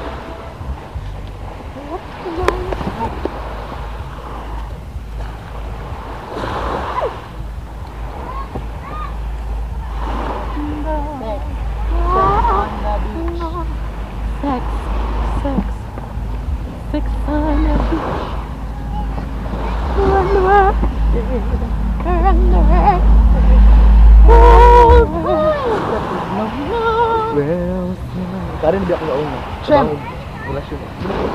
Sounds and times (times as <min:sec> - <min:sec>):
Outside, rural or natural: 0:00.0 - 0:31.3.